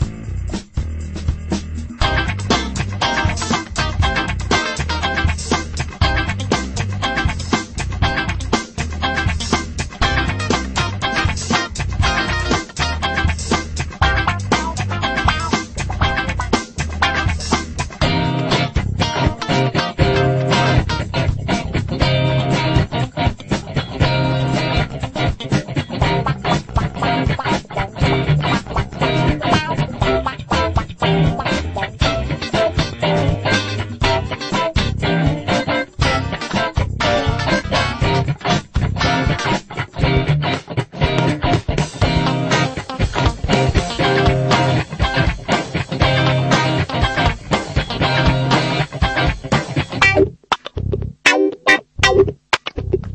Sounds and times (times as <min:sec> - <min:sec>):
Music: 0:00.0 - 0:53.1.